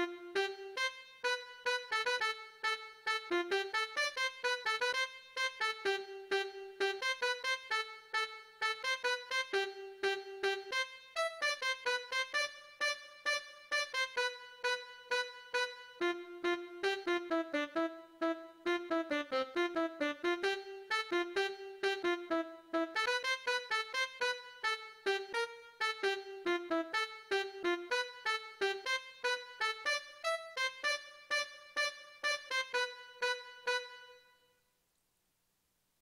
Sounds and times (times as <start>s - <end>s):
Trumpet: 0.0s - 34.6s.